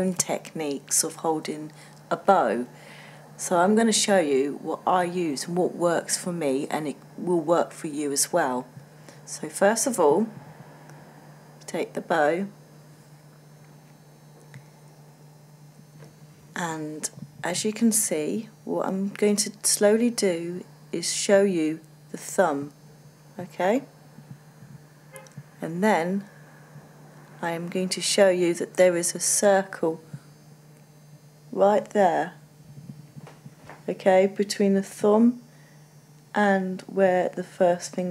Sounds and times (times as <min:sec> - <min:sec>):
Speech: 0:00.0 - 0:02.7, 0:03.4 - 0:10.4, 0:11.7 - 0:12.6, 0:16.6 - 0:22.8, 0:23.4 - 0:23.9, 0:25.6 - 0:26.3, 0:27.4 - 0:30.1, 0:31.5 - 0:32.4, 0:33.9 - 0:35.4, 0:36.4 - 0:38.1.